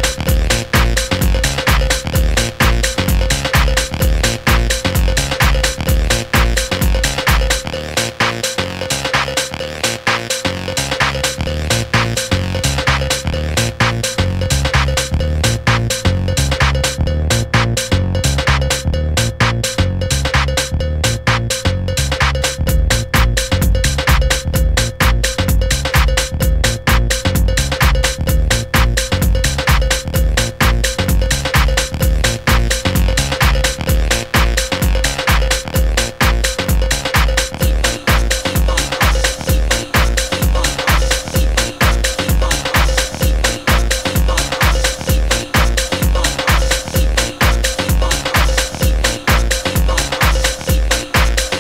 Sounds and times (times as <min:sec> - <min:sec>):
Electronic music: 0:00.0 - 0:51.6.